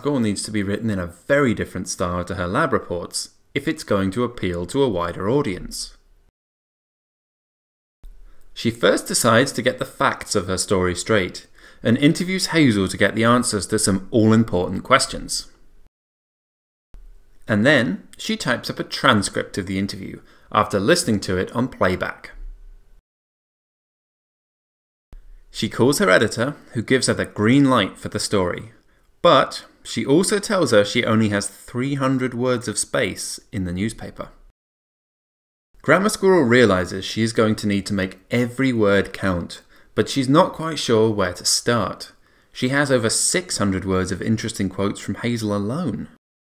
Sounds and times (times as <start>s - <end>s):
Speech: 0.0s - 6.0s, 8.6s - 15.6s, 17.5s - 22.5s, 25.5s - 34.5s, 35.8s - 46.2s.